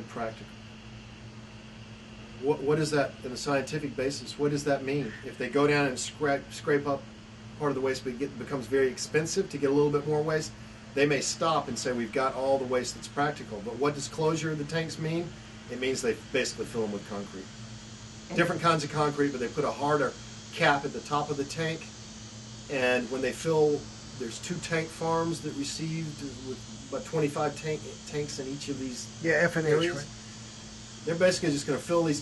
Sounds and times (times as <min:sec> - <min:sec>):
Speech: 0:00.0 - 0:00.5, 0:02.4 - 0:07.0, 0:07.6 - 0:17.5, 0:18.3 - 0:21.9, 0:22.7 - 0:30.1, 0:31.1 - 0:32.2.